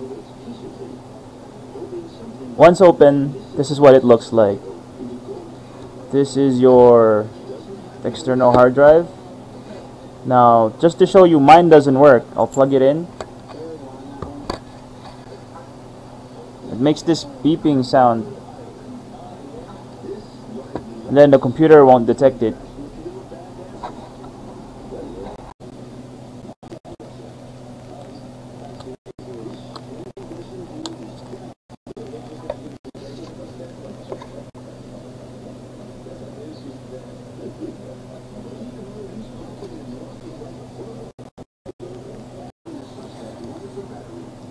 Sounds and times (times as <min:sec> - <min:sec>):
Speech: 0:00.0 - 0:15.4, 0:16.3 - 0:24.2, 0:27.9 - 0:34.5, 0:35.2 - 0:41.2, 0:41.8 - 0:44.5.